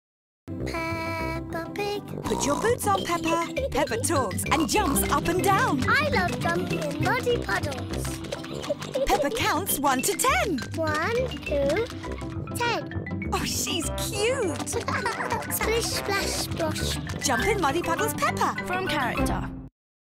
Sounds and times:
Music: 0:00.5 - 0:19.7.

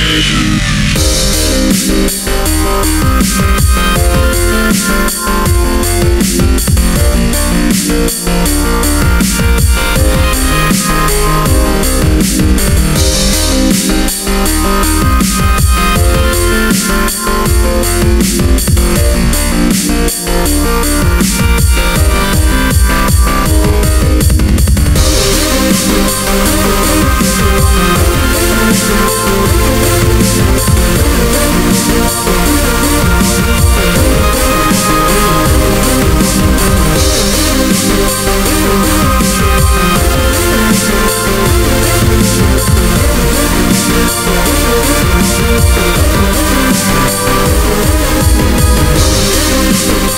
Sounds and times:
Synthesizer: 0:00.0 - 0:50.1.

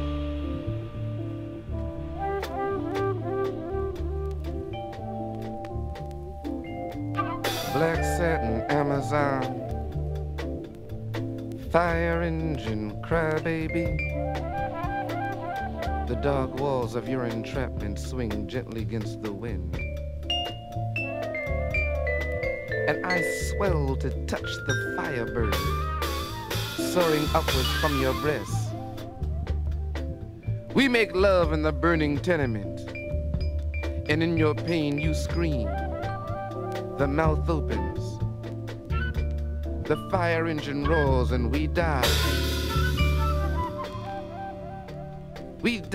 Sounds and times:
Music: 0:00.0 - 0:45.9
Speech: 0:07.7 - 0:09.6, 0:11.6 - 0:14.0, 0:16.1 - 0:19.8, 0:22.9 - 0:25.6, 0:26.8 - 0:28.8, 0:30.8 - 0:32.8, 0:34.1 - 0:35.8, 0:37.0 - 0:38.2, 0:39.9 - 0:42.2, 0:45.6 - 0:45.9.

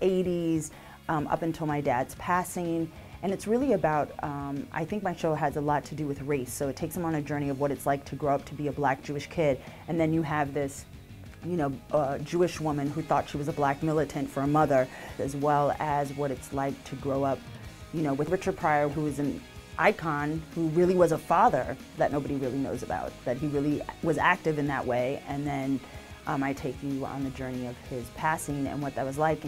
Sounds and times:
Speech: 0:00.0 - 0:10.8, 0:11.4 - 0:17.4, 0:18.0 - 0:29.4
Music: 0:00.0 - 0:29.4.

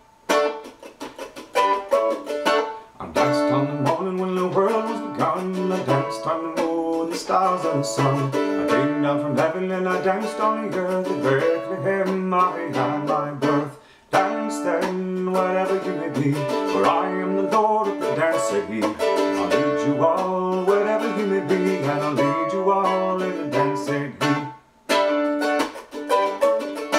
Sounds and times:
Mandolin: 0:00.0 - 0:26.9.

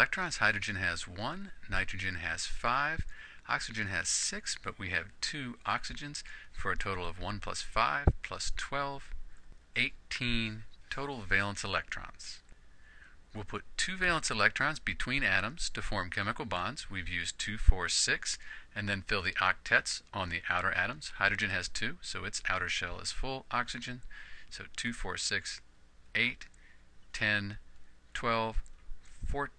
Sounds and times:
Narration, monologue: 0:00.0 - 0:29.5.

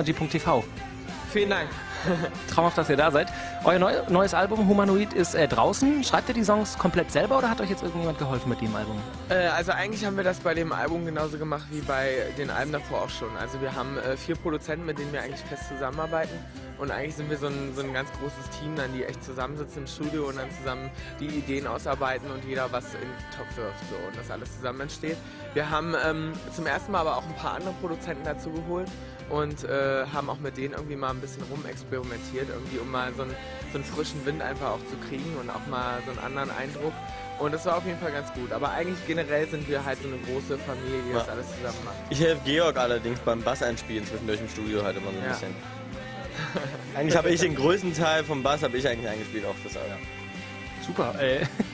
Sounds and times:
Speech: 0:00.0 - 0:45.6, 0:46.9 - 0:50.0, 0:50.8 - 0:51.5
Music: 0:00.0 - 0:51.7.

